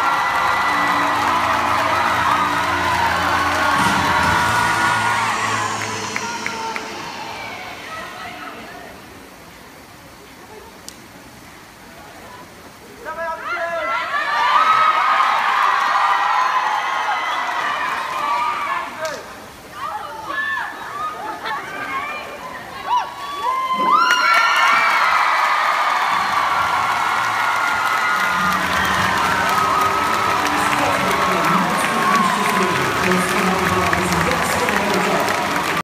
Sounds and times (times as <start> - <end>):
Speech: 30.5 - 35.8.